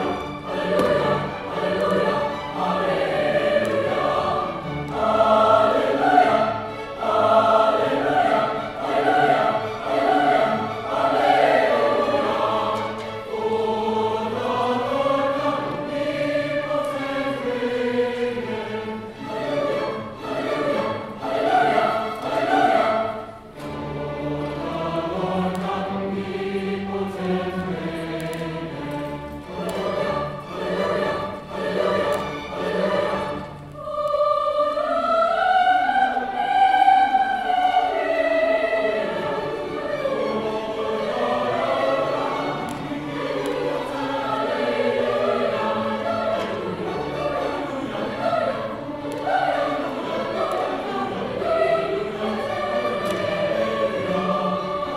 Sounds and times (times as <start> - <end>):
Choir: 0.0 - 54.9.